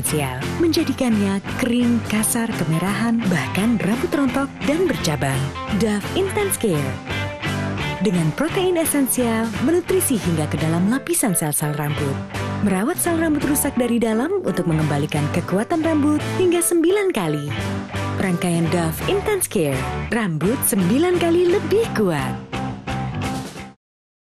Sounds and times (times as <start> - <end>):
Speech: 0.0 - 7.0, 8.0 - 17.6, 18.2 - 22.4
Music: 0.0 - 23.8.